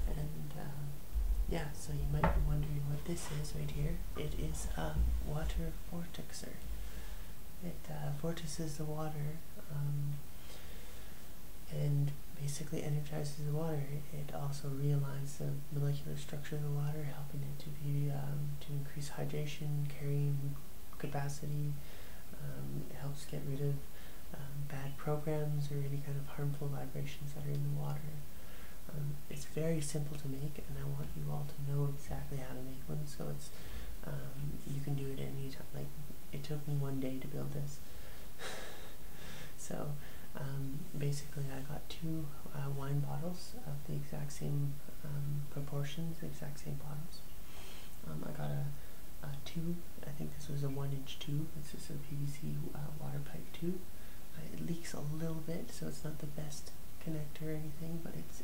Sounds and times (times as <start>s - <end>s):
Speech: 0.0s - 6.8s, 7.6s - 10.2s, 11.7s - 28.3s, 28.9s - 37.8s, 39.6s - 47.3s, 48.0s - 58.4s.